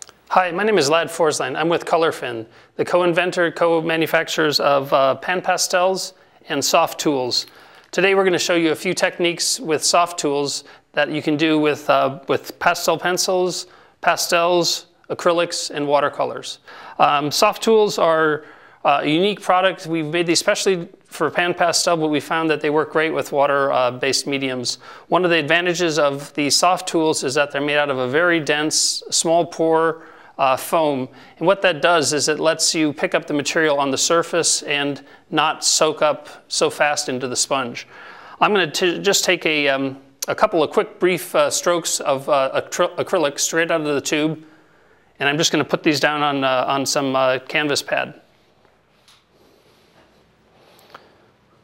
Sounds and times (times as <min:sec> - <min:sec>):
Speech: 0:00.0 - 0:44.5, 0:45.2 - 0:48.3.